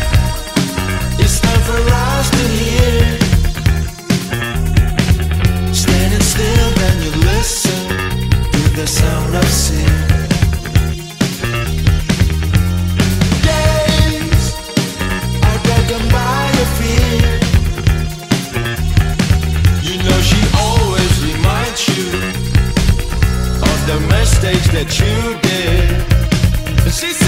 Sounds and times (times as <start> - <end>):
Independent music: 0.0 - 27.2.